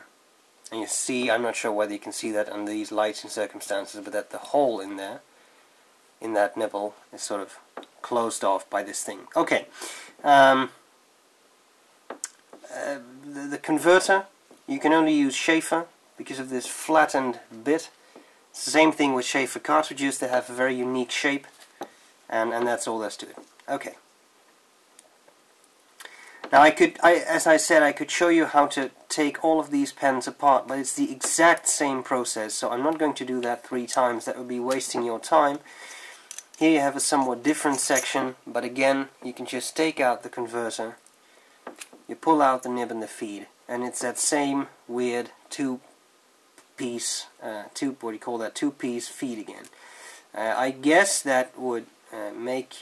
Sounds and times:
Speech: 0:00.7 - 0:05.3, 0:06.2 - 0:10.8, 0:12.6 - 0:18.0, 0:18.6 - 0:21.6, 0:22.3 - 0:24.0, 0:26.5 - 0:35.6, 0:36.6 - 0:41.0, 0:42.1 - 0:45.9, 0:46.8 - 0:49.7, 0:50.3 - 0:52.8.

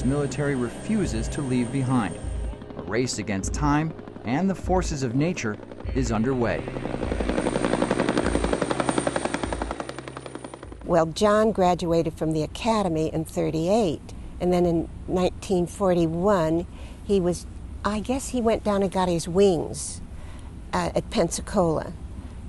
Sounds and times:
Speech: 0:02.8 - 0:06.6, 0:10.9 - 0:20.0, 0:20.8 - 0:22.0.

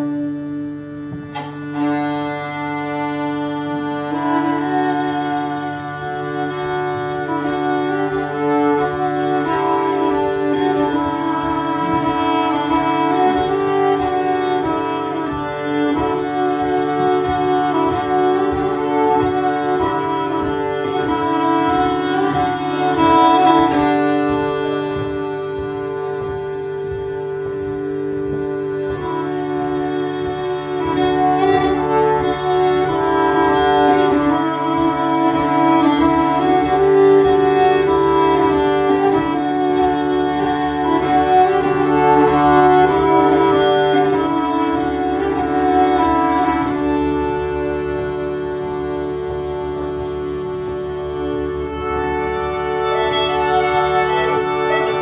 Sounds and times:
Accordion: 0:00.0 - 0:55.0
Violin, fiddle: 0:00.0 - 0:55.0.

